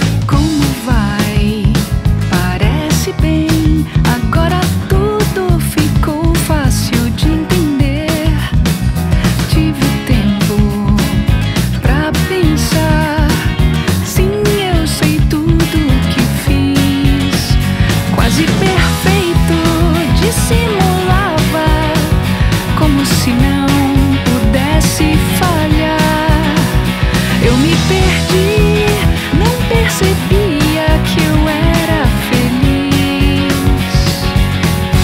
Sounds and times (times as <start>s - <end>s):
Music: 0.0s - 35.0s.